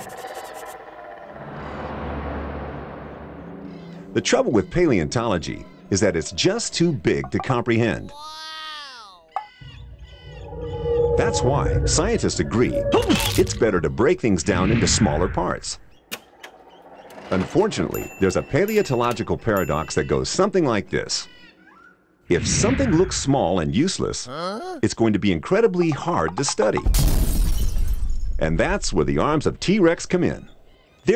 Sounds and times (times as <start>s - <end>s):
Speech: 4.2s - 9.3s, 11.3s - 15.8s, 17.4s - 21.4s, 22.3s - 26.8s, 28.4s - 30.5s.